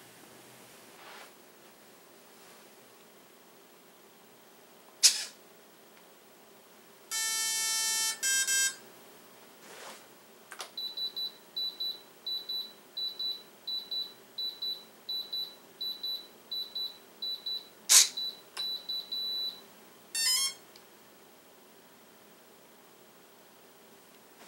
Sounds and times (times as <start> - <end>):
Inside, small room: 0.0 - 24.4
Beep, bleep: 10.8 - 19.6.